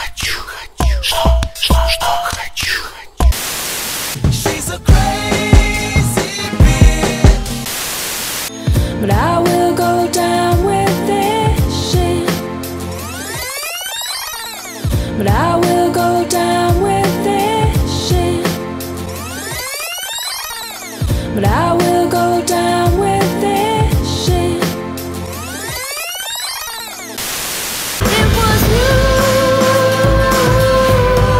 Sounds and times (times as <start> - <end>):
Music: 0.0 - 3.4, 4.2 - 7.7, 8.5 - 25.9, 28.0 - 31.3.